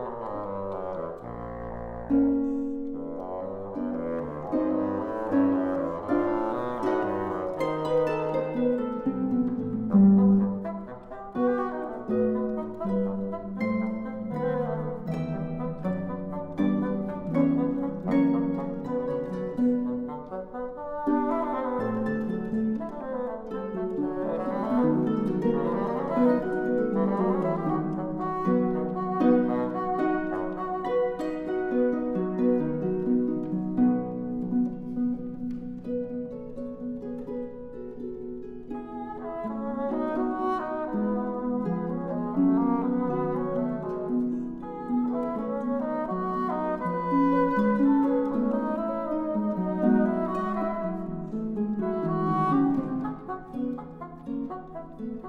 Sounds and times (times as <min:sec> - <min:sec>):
Bowed string instrument: 0:00.0 - 0:55.2
Harp: 0:00.0 - 0:55.2.